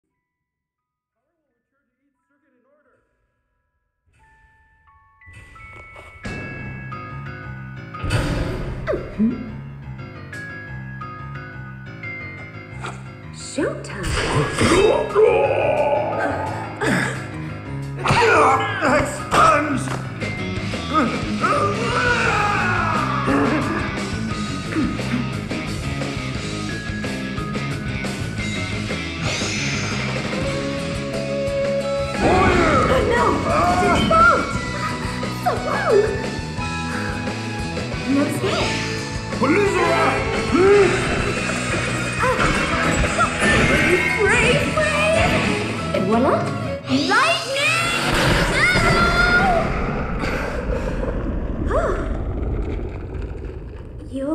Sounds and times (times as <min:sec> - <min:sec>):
Music: 0:00.0 - 0:51.4.